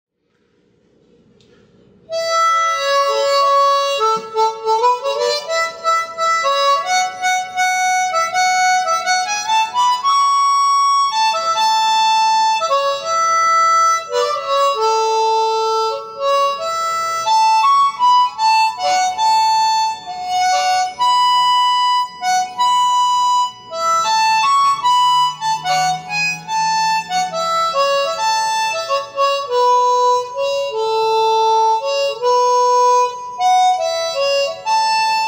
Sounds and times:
Harmonica: 0:02.1 - 0:35.2
Wind instrument, woodwind instrument: 0:02.1 - 0:35.2.

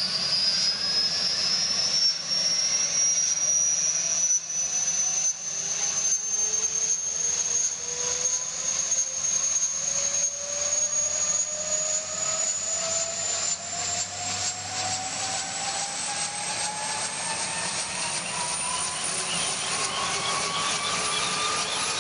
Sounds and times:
Helicopter: 0:00.0 - 0:22.0.

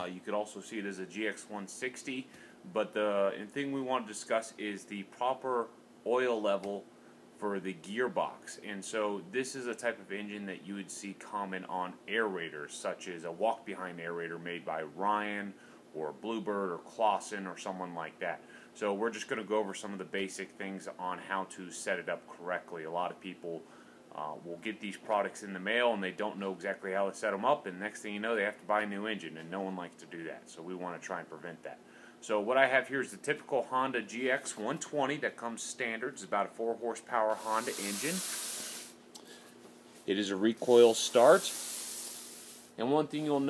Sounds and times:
Speech: 0:00.0 - 0:38.3, 0:40.1 - 0:41.6, 0:42.8 - 0:43.4.

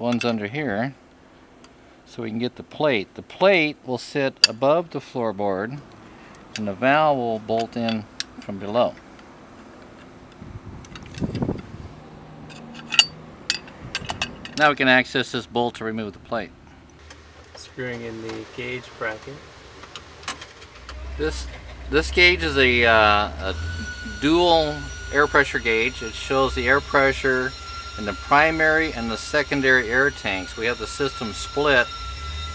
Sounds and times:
Speech: 0:00.0 - 0:01.0, 0:02.1 - 0:05.8, 0:06.6 - 0:09.0, 0:14.6 - 0:16.5, 0:17.6 - 0:19.4, 0:21.2 - 0:31.9.

